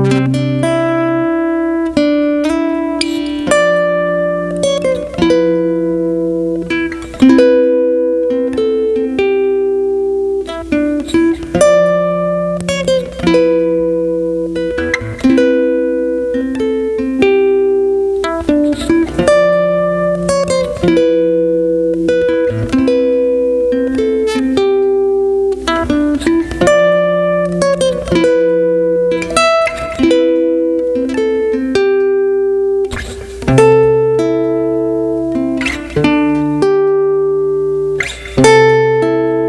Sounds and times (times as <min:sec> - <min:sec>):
Acoustic guitar: 0:00.0 - 0:39.4
Strum: 0:00.0 - 0:39.4.